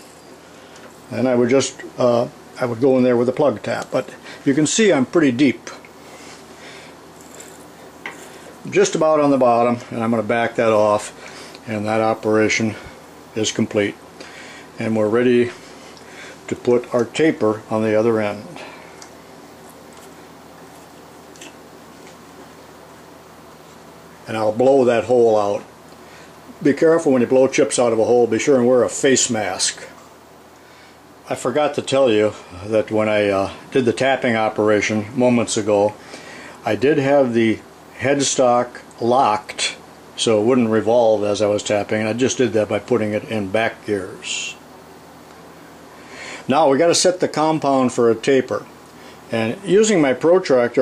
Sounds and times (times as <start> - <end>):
Inside, small room: 0.0 - 50.8
Speech: 1.1 - 5.9, 8.6 - 14.0, 14.8 - 15.6, 16.5 - 18.8, 24.2 - 25.7, 26.6 - 30.0, 31.3 - 36.0, 36.6 - 44.6, 46.5 - 48.7, 49.3 - 50.8.